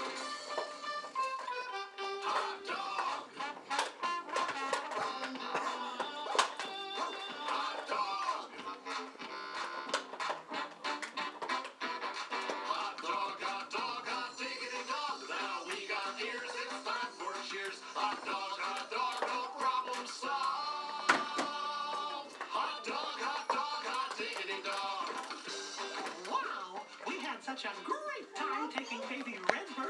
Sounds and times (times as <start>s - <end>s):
Music: 0.0s - 29.8s
Speech: 26.3s - 29.8s.